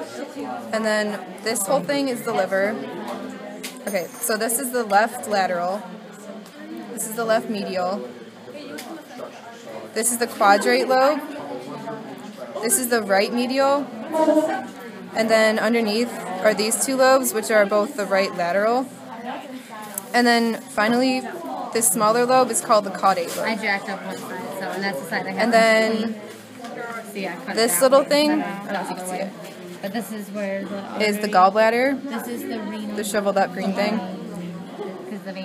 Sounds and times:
Speech: 0.0s - 35.4s.

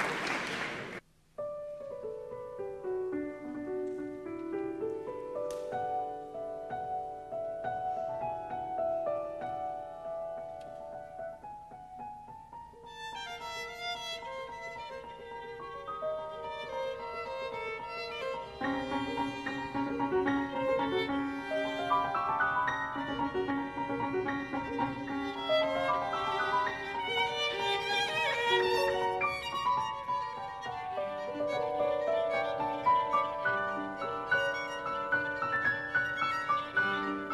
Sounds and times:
Violin, fiddle: 12.8s - 37.3s.

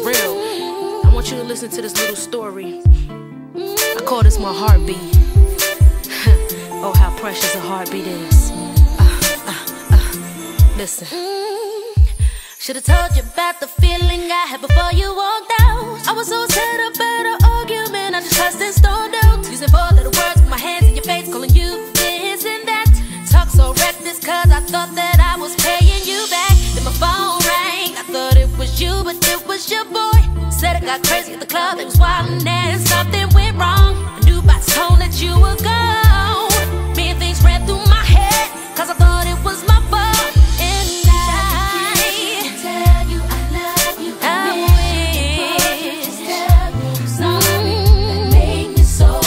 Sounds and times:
Music: 0.0s - 49.2s.

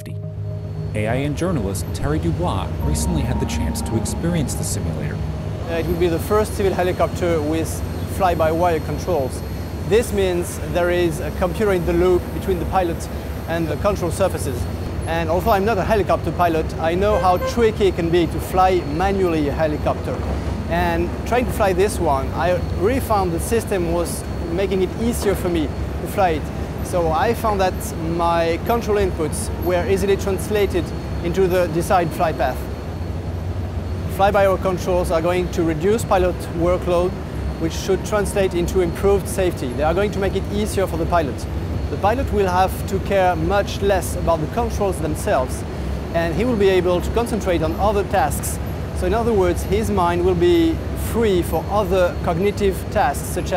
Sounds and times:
Speech: 0.0s - 0.2s, 1.0s - 32.7s, 34.1s - 53.5s
Aircraft: 7.0s - 17.2s, 18.6s - 53.5s.

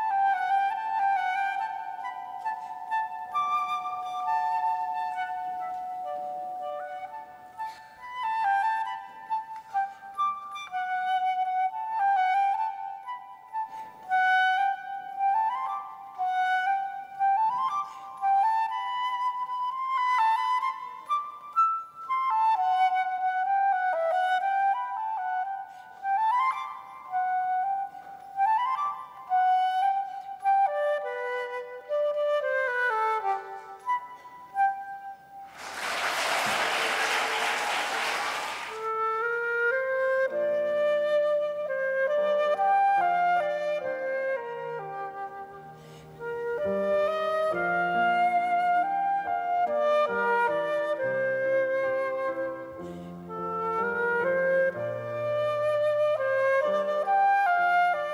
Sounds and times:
Flute: 0.0s - 58.1s.

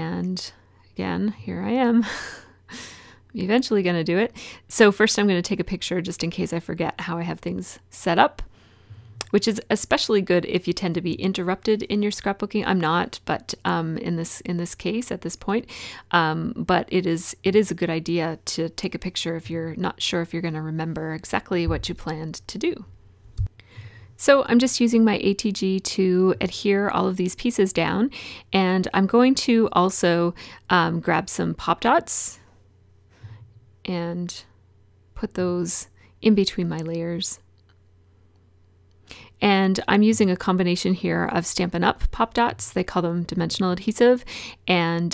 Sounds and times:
Speech: 0.0s - 2.1s, 3.4s - 8.5s, 9.2s - 22.9s, 24.2s - 32.4s, 33.9s - 34.5s, 35.2s - 37.4s, 39.4s - 45.1s.

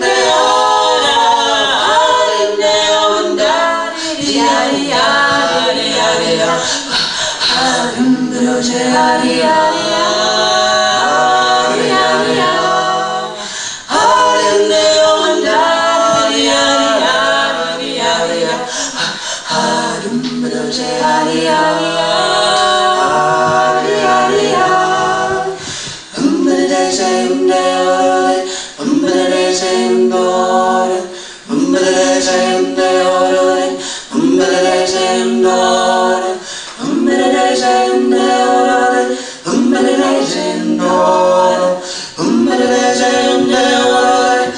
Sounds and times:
Singing: 0.0s - 44.5s
Vocal music: 0.0s - 44.5s.

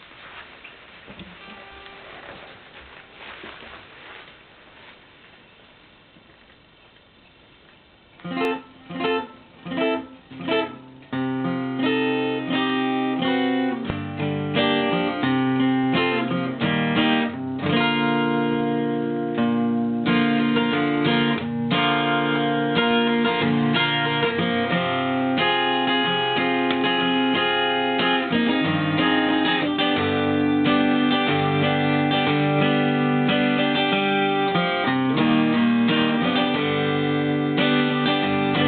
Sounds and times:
Strum: 0.0s - 6.4s, 8.2s - 38.6s
Acoustic guitar: 0.0s - 38.6s.

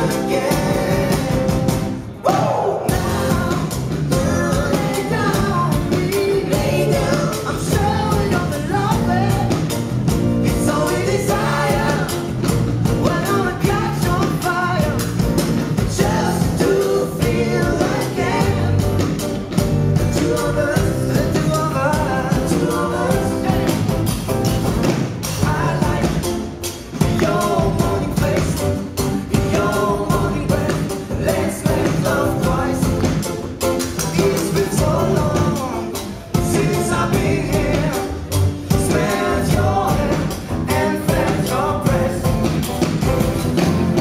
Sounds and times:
Singing: 0.0s - 9.7s, 10.4s - 15.2s, 15.8s - 19.2s, 20.0s - 24.1s, 27.0s - 33.3s, 34.0s - 42.7s.

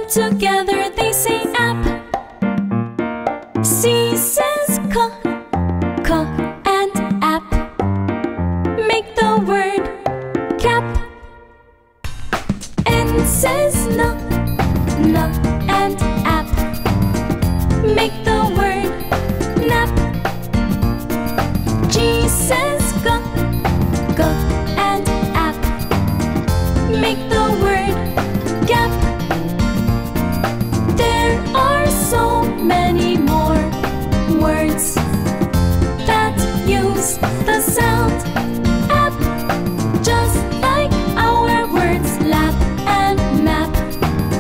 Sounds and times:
Music for children: 12.9s - 44.4s.

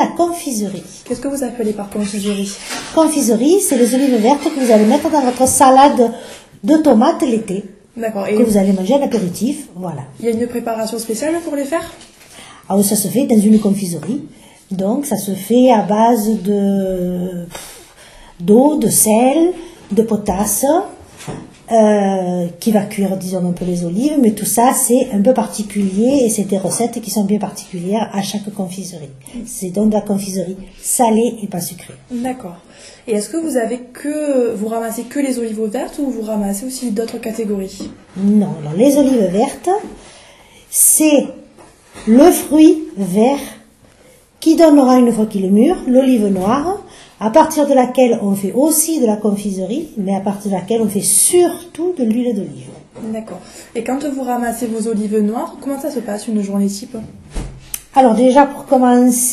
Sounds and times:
Speech: 0.0s - 12.1s, 12.7s - 17.6s, 18.4s - 21.0s, 21.7s - 40.0s, 40.7s - 43.7s, 44.4s - 57.2s, 57.9s - 59.3s.

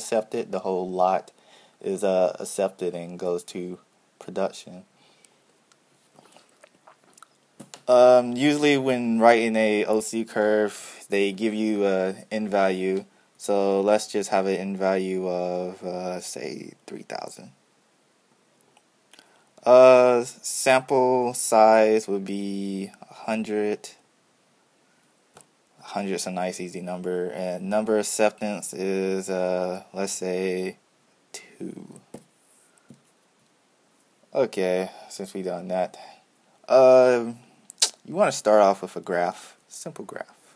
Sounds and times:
Speech: 0.0s - 4.9s, 7.9s - 17.6s, 19.6s - 24.0s, 25.8s - 30.8s, 31.4s - 32.1s, 34.3s - 40.4s.

